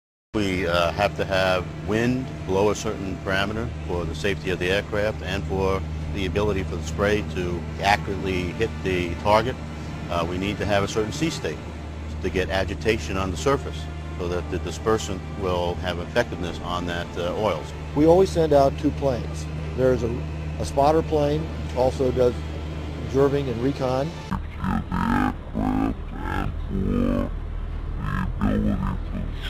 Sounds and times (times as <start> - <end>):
Speech: 0.4 - 11.6, 12.2 - 22.4, 23.0 - 27.3, 28.0 - 29.4.